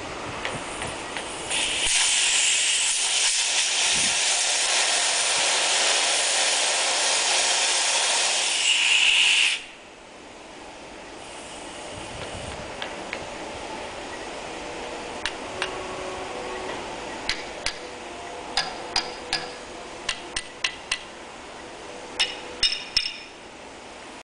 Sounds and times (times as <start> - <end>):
Vehicle: 0.0 - 24.2.